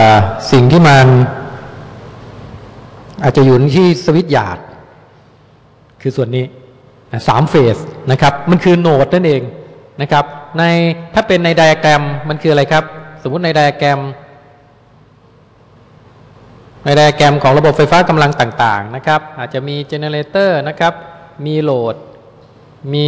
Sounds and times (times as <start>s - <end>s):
Speech: 0.0s - 1.4s, 3.2s - 4.8s, 6.0s - 14.3s, 16.8s - 22.1s, 22.8s - 23.0s.